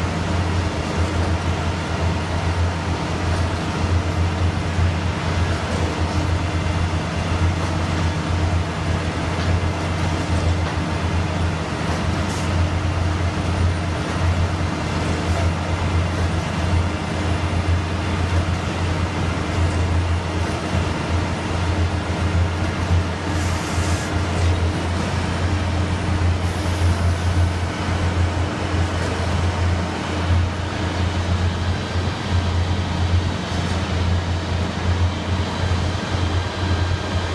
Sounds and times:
Vehicle: 0:00.0 - 0:37.3.

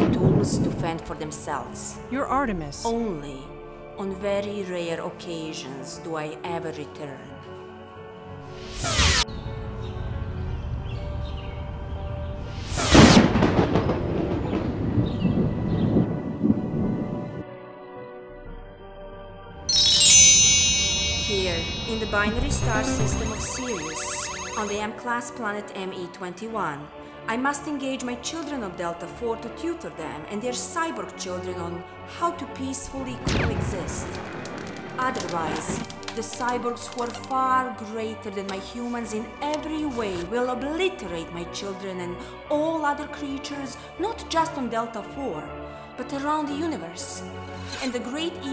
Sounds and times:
Speech: 0:00.0 - 0:07.4, 0:21.3 - 0:23.9, 0:24.6 - 0:34.1, 0:35.0 - 0:48.5
Music: 0:00.0 - 0:48.5.

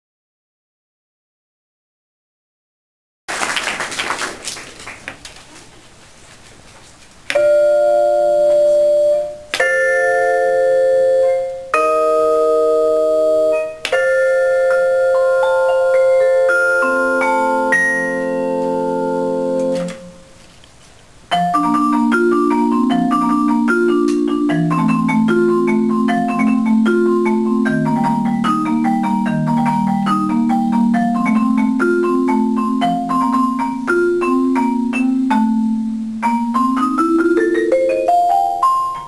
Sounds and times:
Marimba, xylophone: 0:07.4 - 0:20.2, 0:21.3 - 0:39.0
Vibraphone: 0:07.4 - 0:20.2, 0:21.3 - 0:39.0.

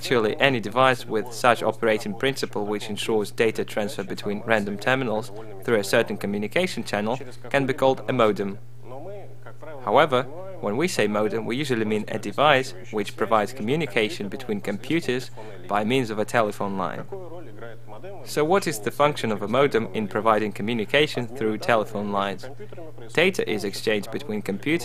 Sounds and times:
Speech: 0:00.0 - 0:24.8.

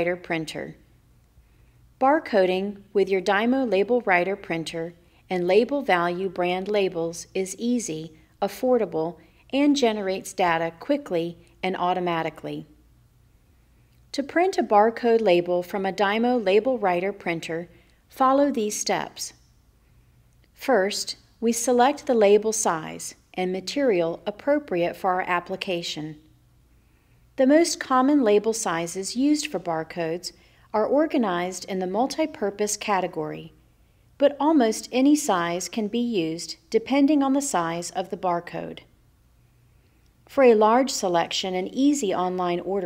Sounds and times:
Speech: 0:00.0 - 0:00.8, 0:02.0 - 0:12.7, 0:14.1 - 0:19.4, 0:20.6 - 0:26.3, 0:27.4 - 0:33.6, 0:34.2 - 0:38.9, 0:40.3 - 0:42.8.

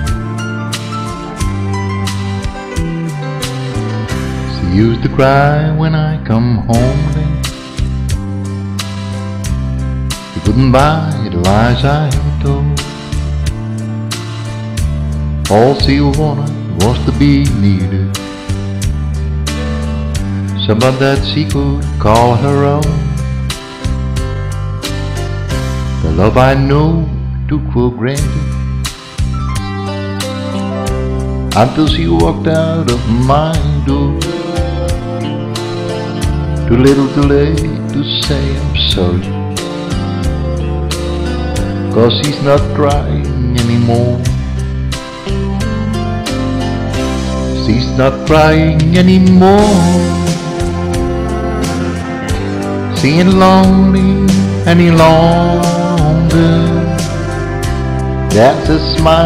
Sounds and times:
Music: 0:00.0 - 0:59.2
Speech: 0:26.0 - 0:28.4, 0:31.6 - 0:33.1, 0:58.3 - 0:59.2.

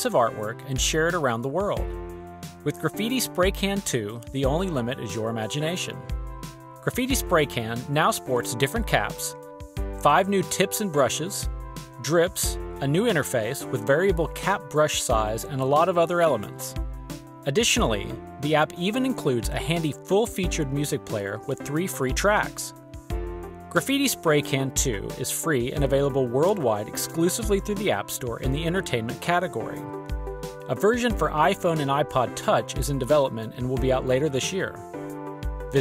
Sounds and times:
Speech: 0:00.0 - 0:01.8, 0:02.6 - 0:06.0, 0:06.8 - 0:09.4, 0:10.0 - 0:16.8, 0:17.5 - 0:22.7, 0:23.8 - 0:29.9, 0:30.7 - 0:34.8
Music: 0:00.0 - 0:35.8.

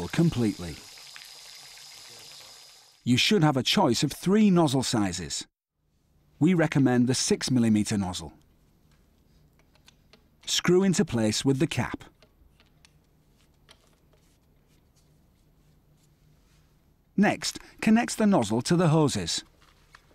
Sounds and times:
Speech: 0:00.0 - 0:00.8, 0:02.1 - 0:05.5, 0:06.4 - 0:08.4, 0:10.5 - 0:12.1, 0:17.2 - 0:19.5.

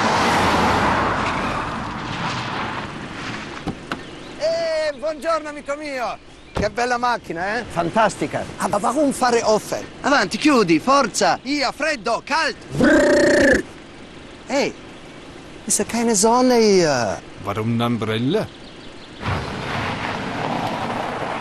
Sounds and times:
Outside, rural or natural: 0:00.0 - 0:21.4
Vehicle: 0:00.0 - 0:21.4
Speech: 0:04.4 - 0:12.6, 0:14.5 - 0:14.8, 0:15.7 - 0:18.5.

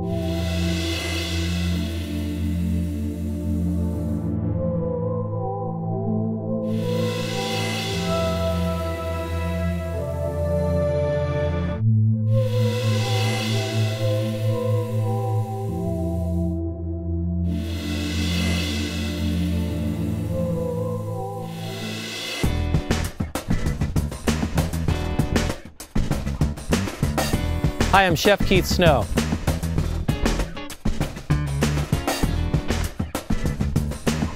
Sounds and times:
Ambient music: 0:00.0 - 0:34.3.

